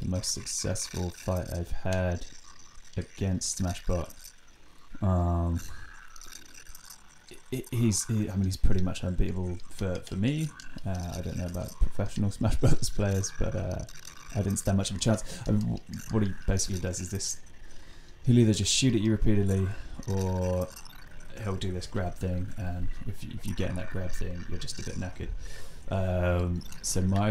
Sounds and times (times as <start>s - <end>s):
Speech: 0.0s - 2.2s, 3.0s - 4.1s, 5.0s - 5.7s, 7.4s - 17.4s, 18.3s - 20.7s, 21.4s - 27.3s.